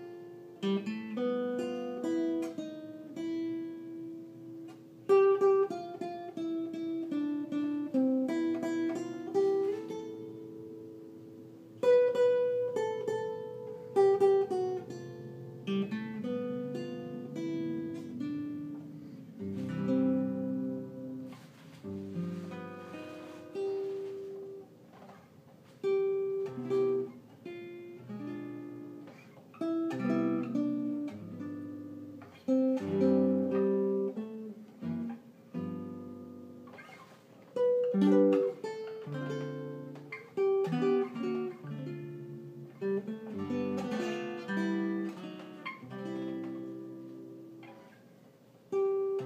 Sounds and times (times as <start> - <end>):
Acoustic guitar: 0.0 - 49.2.